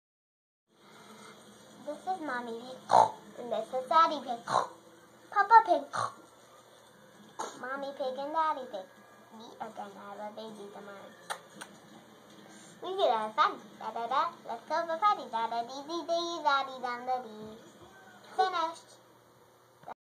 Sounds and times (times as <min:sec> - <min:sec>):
Speech: 0:01.8 - 0:04.7, 0:05.3 - 0:06.2, 0:07.4 - 0:11.4, 0:12.8 - 0:19.0.